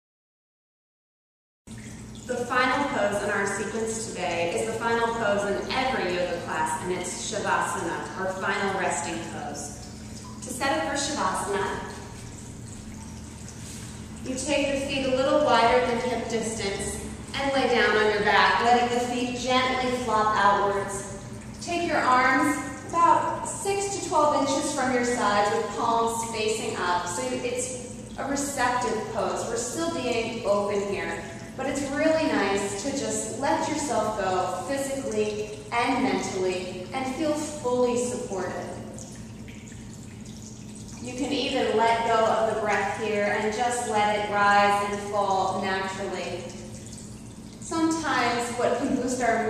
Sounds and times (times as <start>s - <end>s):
Inside, large room or hall: 1.8s - 49.4s
Speech: 2.3s - 9.8s, 10.4s - 11.9s, 14.3s - 38.8s, 41.0s - 46.5s, 47.6s - 49.4s.